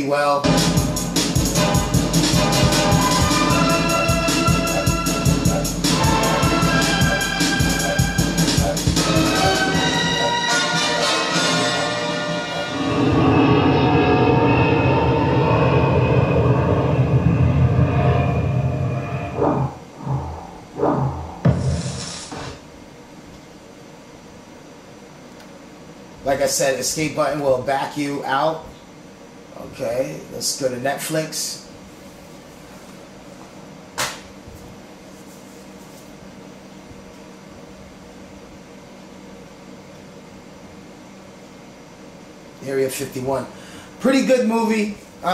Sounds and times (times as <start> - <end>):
Speech: 0.0 - 0.4, 26.2 - 28.7, 29.5 - 31.7, 42.6 - 45.3.